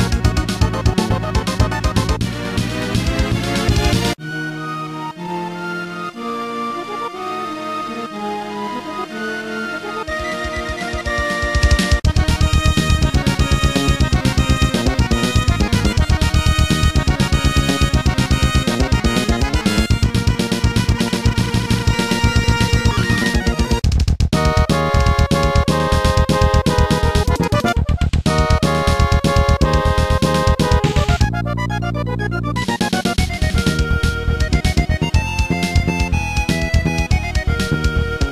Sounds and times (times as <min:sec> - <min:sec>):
Video game music: 0:00.0 - 0:38.3.